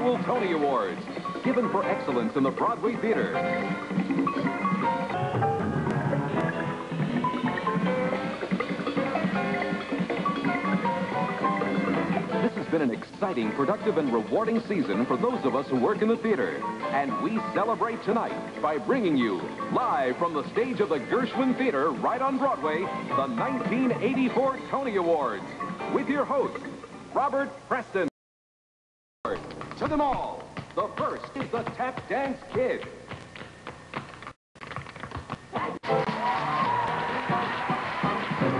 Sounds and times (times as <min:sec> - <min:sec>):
Speech: 0:00.0 - 0:03.4, 0:12.4 - 0:26.6, 0:27.2 - 0:28.1, 0:29.3 - 0:33.0
Music: 0:00.0 - 0:28.1, 0:35.1 - 0:38.5.